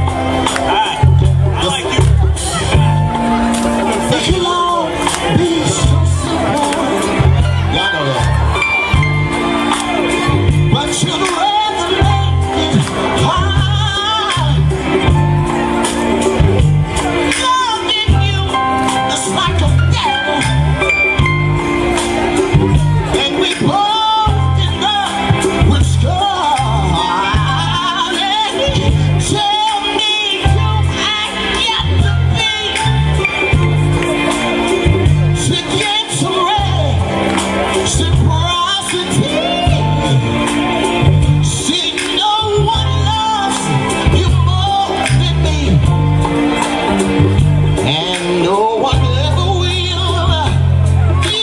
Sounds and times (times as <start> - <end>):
Music: 0.0 - 51.4
Speech: 0.7 - 8.4.